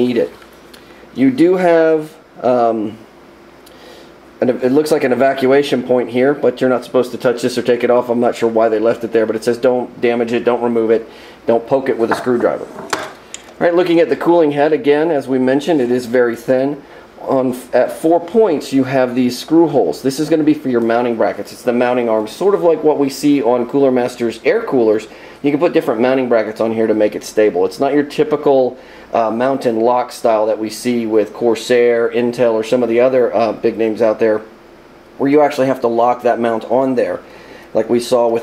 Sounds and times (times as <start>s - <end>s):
Speech: 0.0s - 0.4s, 1.2s - 3.1s, 4.4s - 34.5s, 35.2s - 38.4s
Inside, small room: 0.0s - 38.4s.